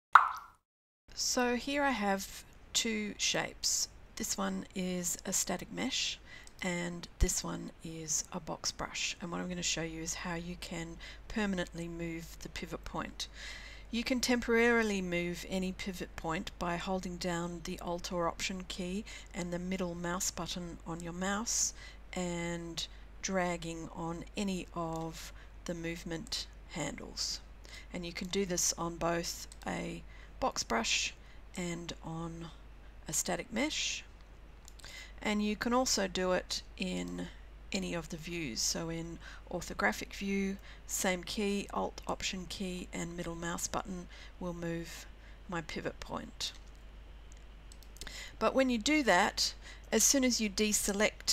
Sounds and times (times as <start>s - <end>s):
Plop: 0.2s - 0.6s
Speech: 1.2s - 13.3s, 13.9s - 34.1s, 35.2s - 46.6s, 48.4s - 51.3s.